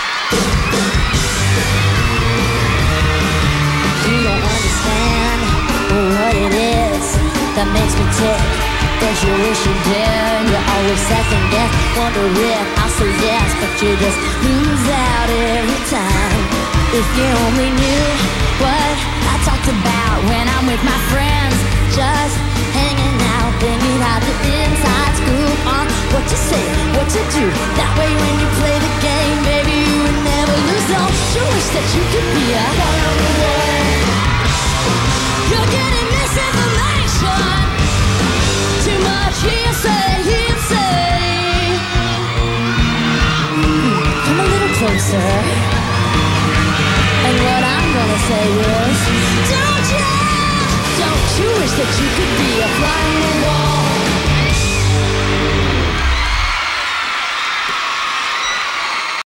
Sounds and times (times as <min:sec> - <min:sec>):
Music: 0:00.0 - 0:59.2
Female singing: 0:04.0 - 0:34.1, 0:35.4 - 0:37.8, 0:38.8 - 0:42.2, 0:47.2 - 0:54.2.